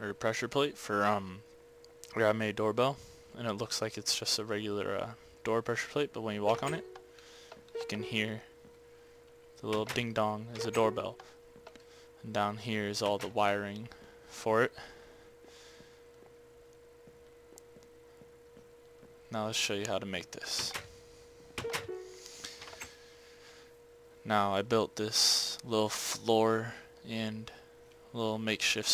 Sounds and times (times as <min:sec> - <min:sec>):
Speech: 0:00.0 - 0:01.4, 0:02.1 - 0:06.8, 0:07.8 - 0:08.5, 0:09.6 - 0:11.2, 0:12.2 - 0:14.8, 0:19.3 - 0:20.8, 0:24.2 - 0:28.9.